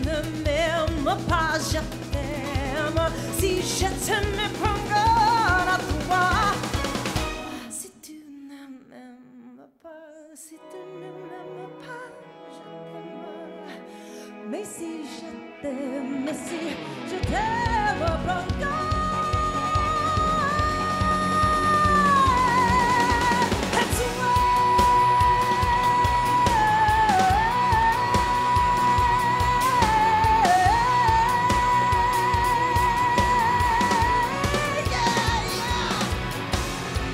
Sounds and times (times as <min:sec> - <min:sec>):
Opera: 0:00.0 - 0:36.3.